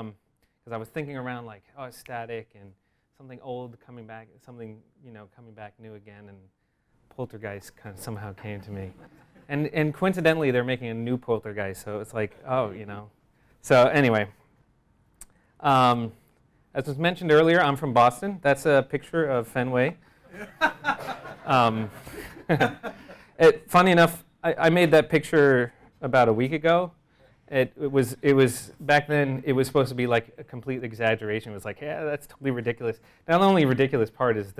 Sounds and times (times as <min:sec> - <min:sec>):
Speech: 0:00.0 - 0:06.5, 0:07.1 - 0:14.4, 0:15.6 - 0:20.0, 0:21.5 - 0:22.0, 0:23.4 - 0:34.5.